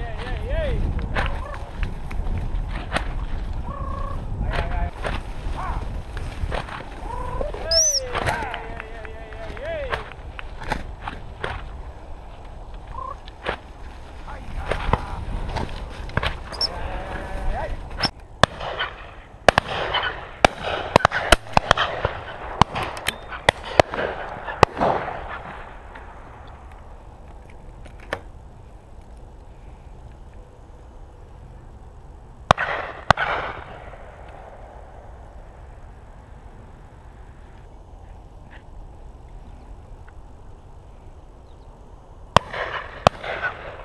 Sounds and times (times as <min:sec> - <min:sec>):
Gunshot, gunfire: 0:18.4 - 0:25.5, 0:32.5 - 0:33.9, 0:42.4 - 0:43.8.